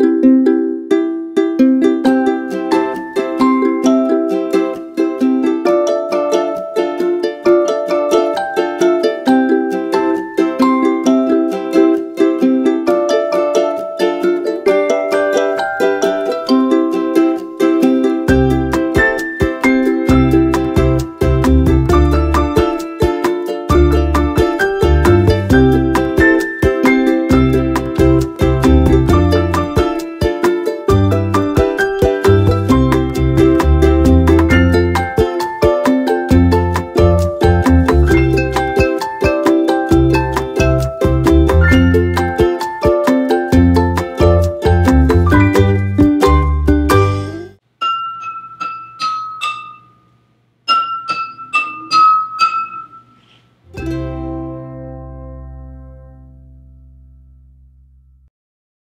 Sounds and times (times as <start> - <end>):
Music: 0.0 - 58.3
Glass: 47.8 - 50.1, 50.7 - 53.5.